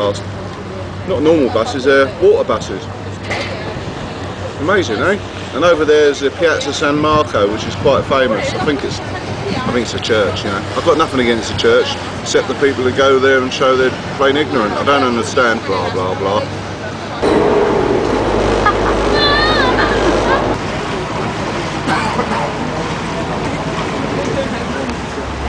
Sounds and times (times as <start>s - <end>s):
Motorboat, speedboat: 0.0s - 17.2s, 21.3s - 25.4s.